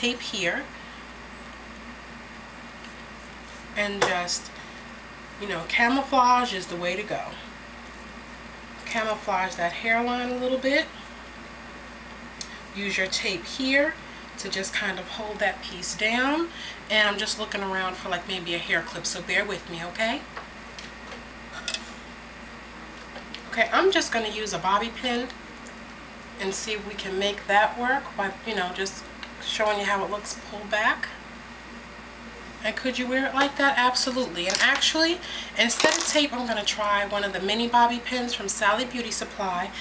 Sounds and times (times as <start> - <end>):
Speech: 0.0 - 0.7, 3.8 - 4.5, 5.4 - 7.5, 8.9 - 10.9, 12.8 - 20.3, 23.5 - 25.4, 26.4 - 31.2, 32.6 - 39.8.